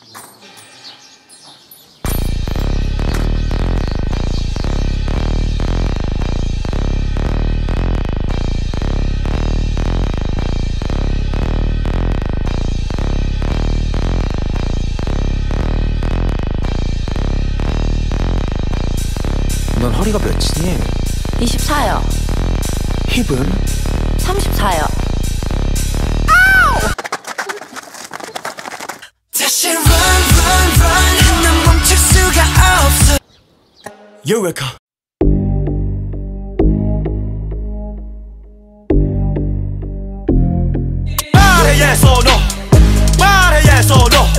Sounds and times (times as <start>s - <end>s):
Music: 2.1s - 26.9s, 29.4s - 33.2s, 35.2s - 44.3s
Speech: 19.8s - 22.1s, 23.1s - 23.6s, 24.2s - 25.0s, 34.2s - 34.8s.